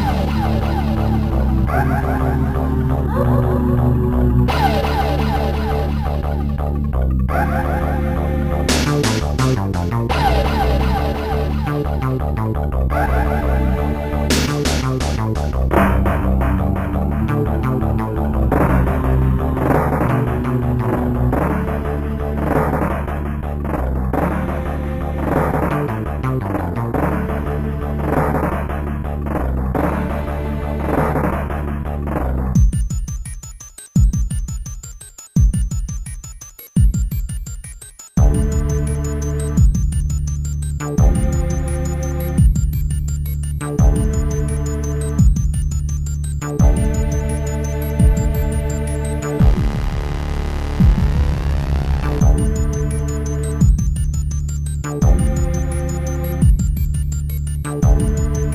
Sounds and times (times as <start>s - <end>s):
Music: 0.0s - 58.5s.